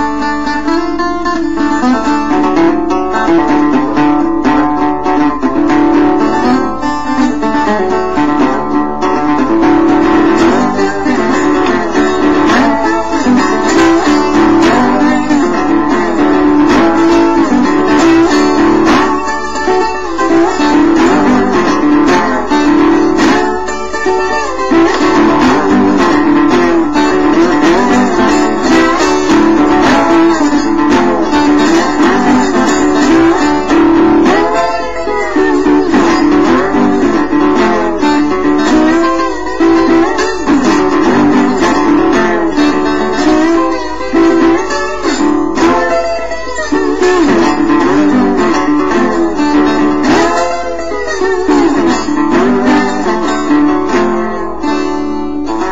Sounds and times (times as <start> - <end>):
Electric guitar: 0.0 - 55.7
Mandolin: 0.0 - 55.7.